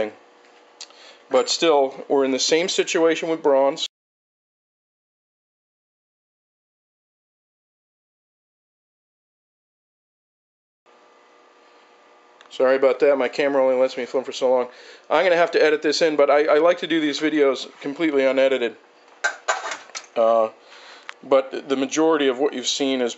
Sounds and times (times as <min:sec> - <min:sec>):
Speech: 0:00.0 - 0:00.2, 0:01.3 - 0:03.9, 0:12.5 - 0:18.8, 0:20.2 - 0:20.6, 0:21.2 - 0:23.1.